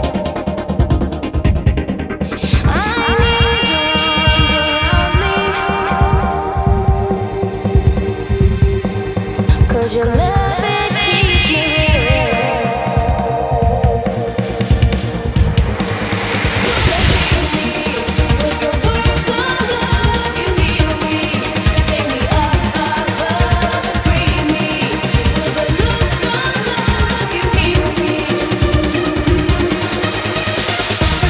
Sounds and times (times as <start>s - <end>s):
Electronic music: 0.0s - 31.2s.